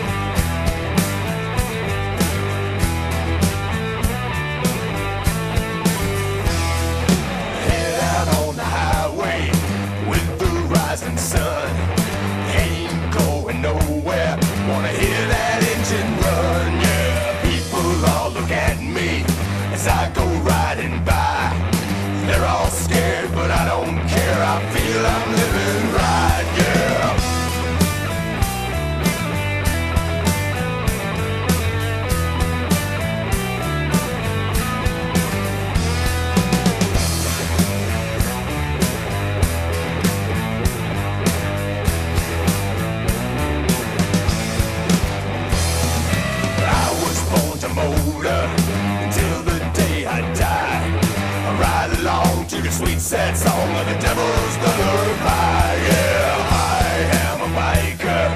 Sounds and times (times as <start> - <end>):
Music: 0.0 - 58.3.